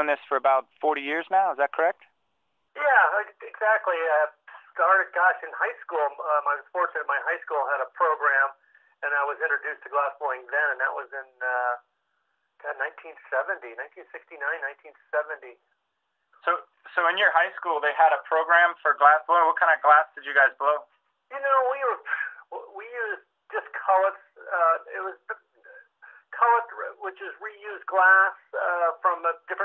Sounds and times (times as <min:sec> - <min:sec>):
Speech: 0:00.0 - 0:02.1, 0:02.8 - 0:11.9, 0:12.6 - 0:15.6, 0:16.4 - 0:29.6.